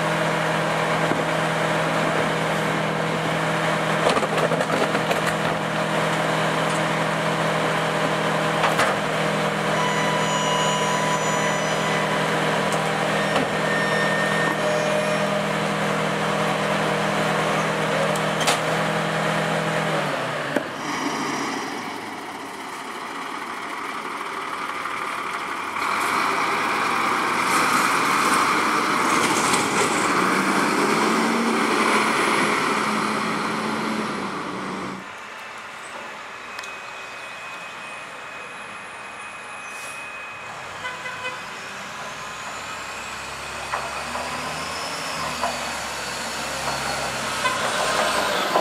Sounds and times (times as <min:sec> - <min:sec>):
Truck: 0:00.0 - 0:48.6.